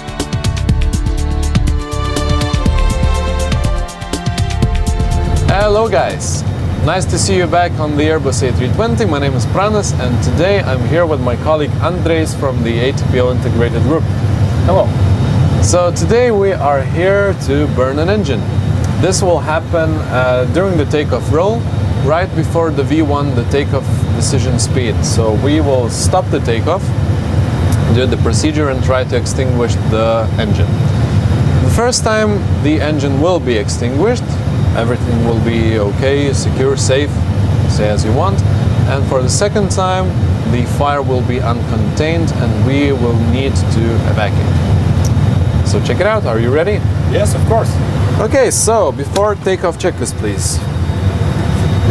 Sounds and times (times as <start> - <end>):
Heavy engine (low frequency): 4.6 - 51.9
Vehicle: 5.4 - 51.9
Speech: 5.5 - 14.9, 15.6 - 18.4, 19.0 - 26.9, 27.8 - 30.8, 31.6 - 44.6, 45.7 - 50.7.